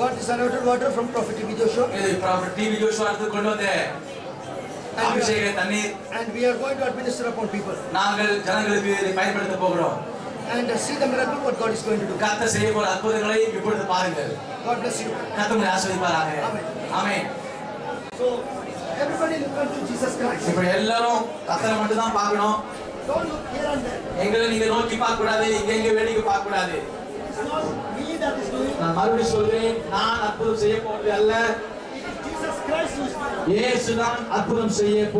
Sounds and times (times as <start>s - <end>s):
Speech: 4.9s - 35.2s.